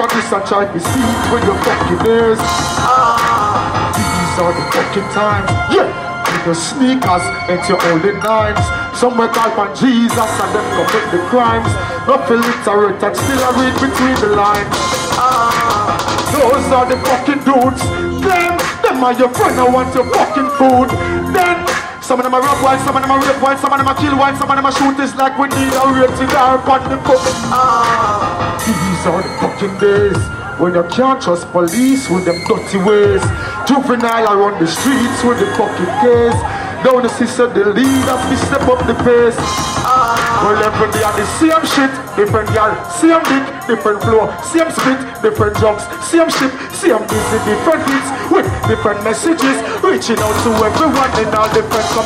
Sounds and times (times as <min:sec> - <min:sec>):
Music: 0:00.0 - 0:52.0.